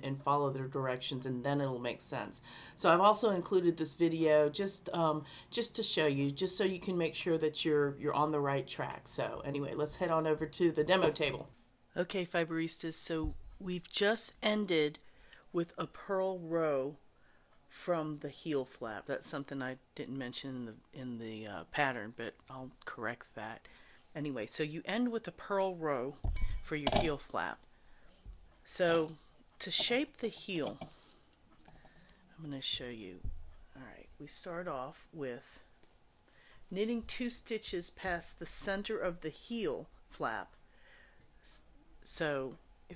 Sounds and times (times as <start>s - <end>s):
Speech: 0.0s - 17.0s, 17.7s - 27.6s, 28.7s - 30.9s, 32.4s - 35.7s, 36.7s - 40.6s, 41.5s - 42.9s.